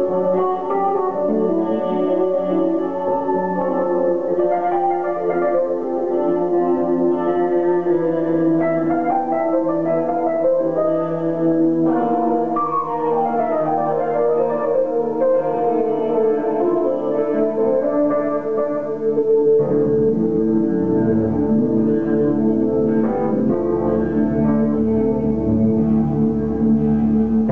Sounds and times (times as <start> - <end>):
Music: 0.0 - 27.5.